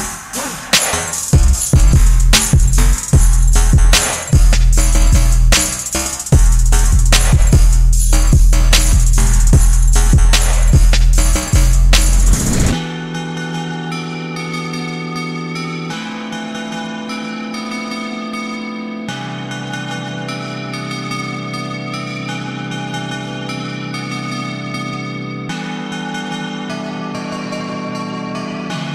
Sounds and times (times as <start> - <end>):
Music: 0.0 - 28.9.